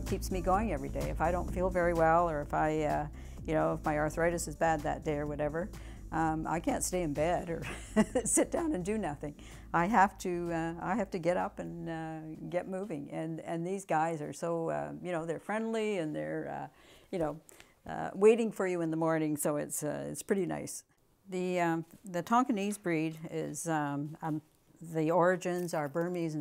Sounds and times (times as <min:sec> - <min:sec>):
Speech: 0:00.0 - 0:26.4.